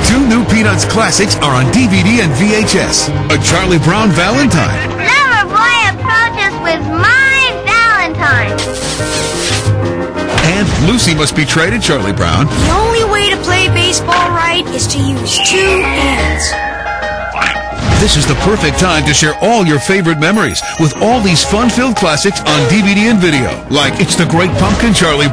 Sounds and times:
Music: 0:00.0 - 0:25.3
Speech: 0:18.0 - 0:25.3.

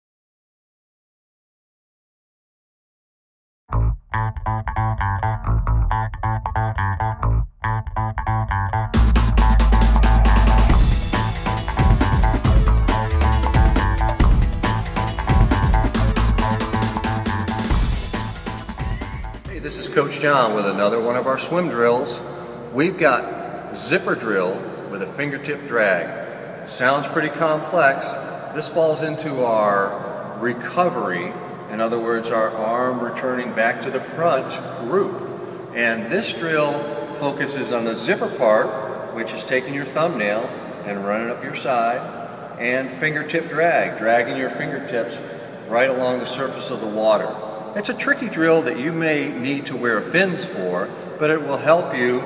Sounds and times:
Speech: 0:19.5 - 0:26.1, 0:26.7 - 0:35.2, 0:35.8 - 0:42.0, 0:42.6 - 0:52.2.

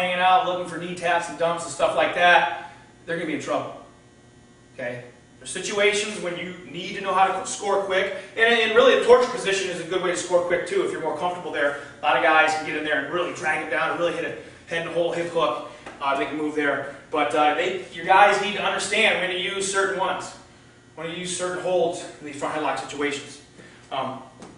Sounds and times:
Speech: 0:00.0 - 0:03.8, 0:04.8 - 0:20.4, 0:21.0 - 0:24.3.

